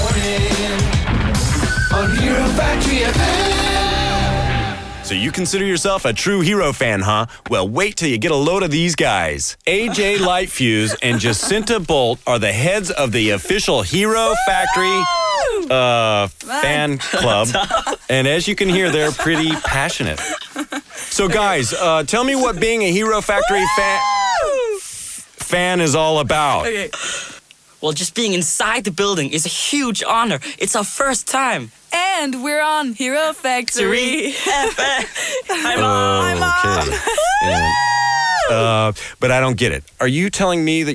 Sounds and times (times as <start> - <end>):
Music: 0.0 - 5.6
Speech: 5.1 - 20.3, 27.8 - 34.4, 35.6 - 37.8, 38.5 - 40.9.